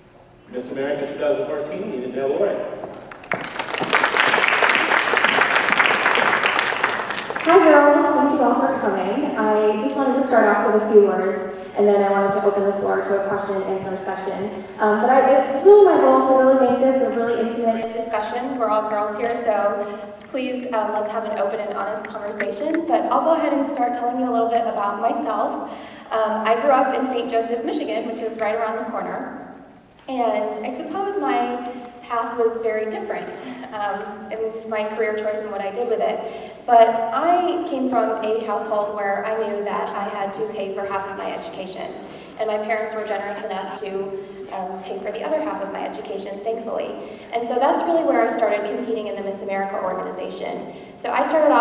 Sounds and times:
Narration, monologue: 0:07.0 - 0:51.6
Female speech, woman speaking: 0:07.5 - 0:29.3, 0:30.0 - 0:51.6.

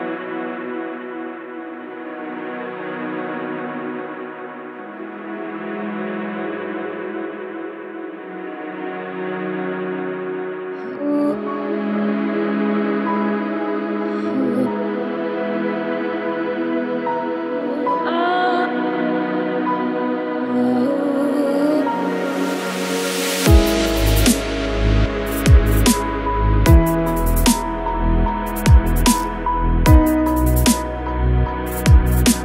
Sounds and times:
Ambient music: 0:00.0 - 0:32.4.

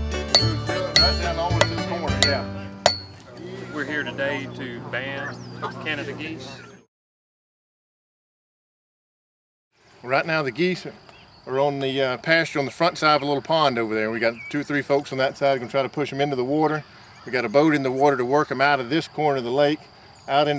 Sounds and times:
Speech: 0:10.0 - 0:20.5.

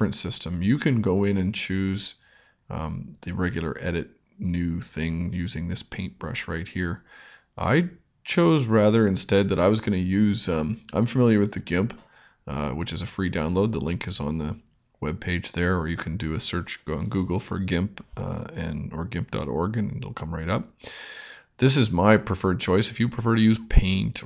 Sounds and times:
Speech: 0:00.0 - 0:20.8, 0:21.6 - 0:24.2.

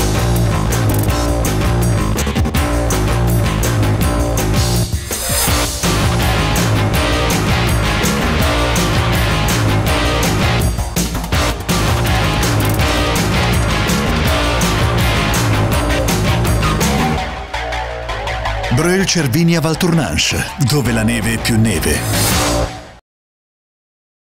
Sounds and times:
Music: 0:00.0 - 0:23.0
Speech: 0:18.7 - 0:22.1.

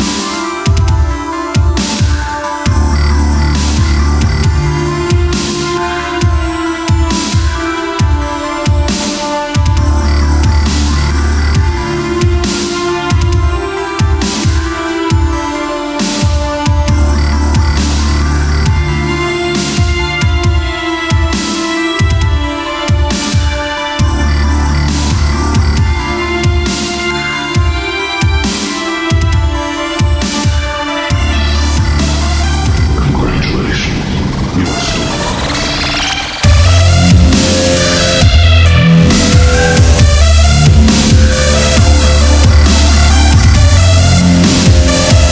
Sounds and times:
Dubstep: 0:00.0 - 0:45.3.

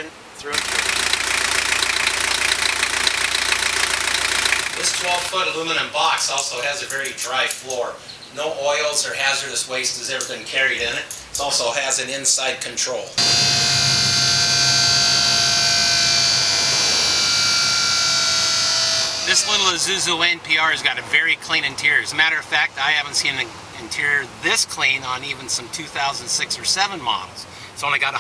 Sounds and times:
Speech: 0:00.0 - 0:00.6, 0:04.8 - 0:13.2, 0:19.3 - 0:28.2.

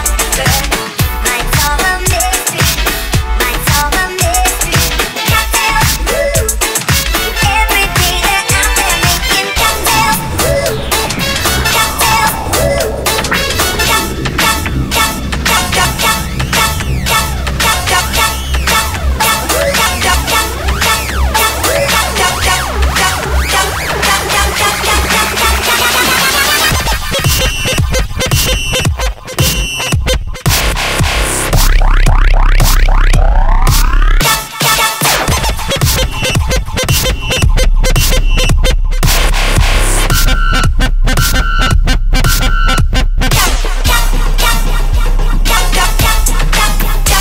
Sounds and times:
Dubstep: 0:00.0 - 0:47.2.

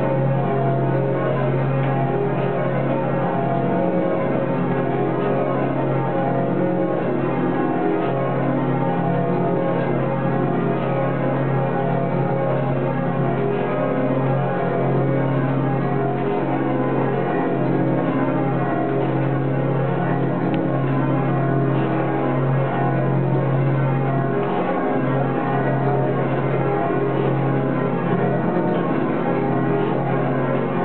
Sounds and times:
Change ringing (campanology): 0:00.0 - 0:30.8.

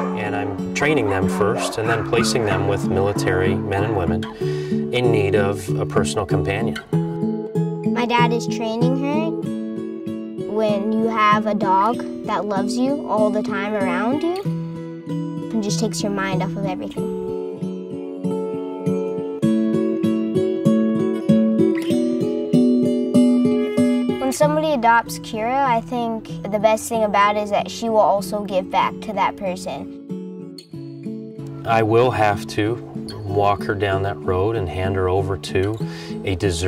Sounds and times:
Music: 0:00.0 - 0:36.6.

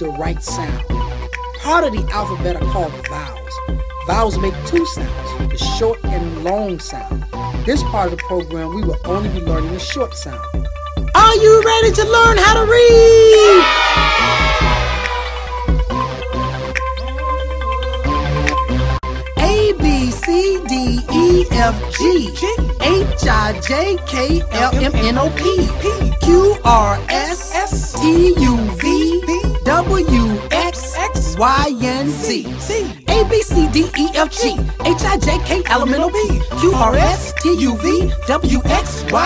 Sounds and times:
Speech: 0:00.0 - 0:00.8, 0:01.6 - 0:10.5, 0:11.2 - 0:13.7, 0:19.4 - 0:39.2
Music: 0:00.0 - 0:39.2.

